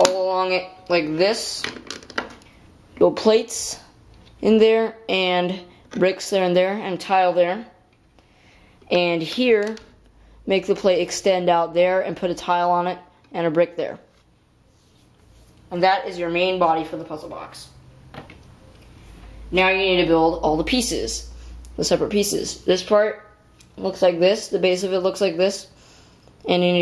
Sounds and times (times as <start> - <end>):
Speech: 0.0 - 1.7, 3.0 - 7.8, 8.9 - 9.9, 10.5 - 14.1, 15.7 - 17.7, 19.5 - 25.7, 26.4 - 26.8
Inside, small room: 0.0 - 26.8.